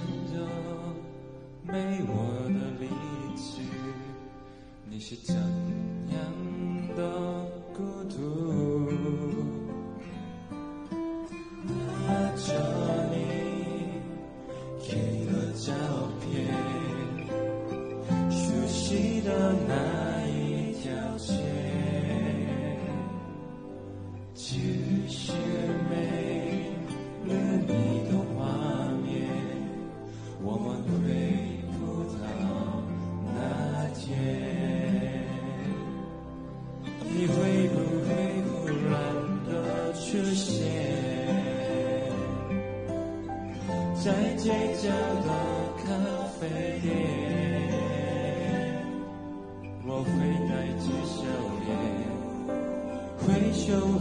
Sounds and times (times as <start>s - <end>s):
Male singing: 0.0s - 9.9s, 11.6s - 23.4s, 24.3s - 36.1s, 37.0s - 42.6s, 43.6s - 54.0s
Music: 0.0s - 54.0s.